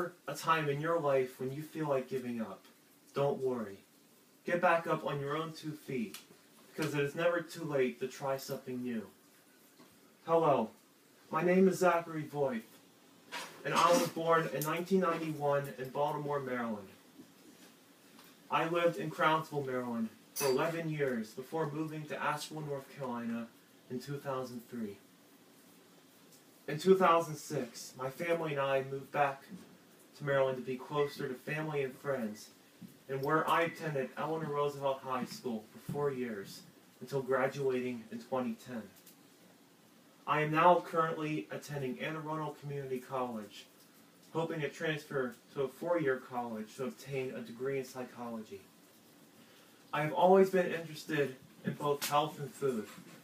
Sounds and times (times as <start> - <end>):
Male speech, man speaking: 0.0 - 2.6, 3.2 - 3.8, 4.5 - 6.2, 6.8 - 9.2, 10.3 - 10.7, 11.3 - 12.7, 13.6 - 17.0, 18.5 - 25.0, 26.7 - 29.5, 30.2 - 32.5, 33.1 - 39.0, 40.3 - 43.7, 44.4 - 48.7, 50.0 - 53.0.